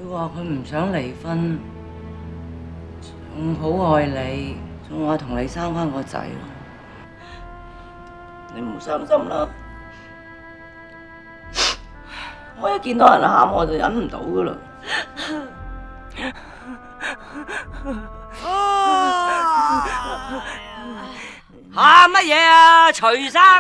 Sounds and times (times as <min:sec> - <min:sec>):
Music: 0:00.0 - 0:23.6.